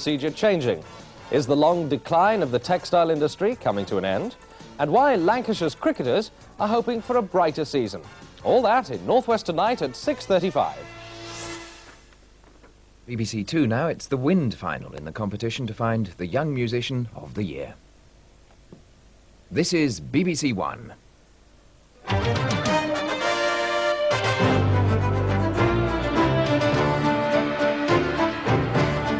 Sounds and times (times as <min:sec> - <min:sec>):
Speech: 0:00.0 - 0:10.8, 0:13.1 - 0:17.8, 0:19.5 - 0:21.0
Music: 0:00.0 - 0:12.0, 0:22.0 - 0:29.1.